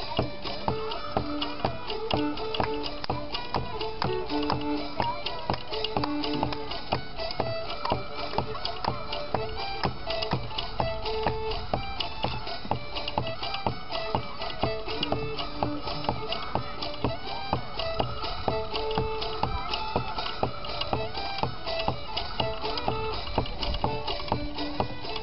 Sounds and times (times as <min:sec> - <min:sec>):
Violin, fiddle: 0:00.0 - 0:25.2.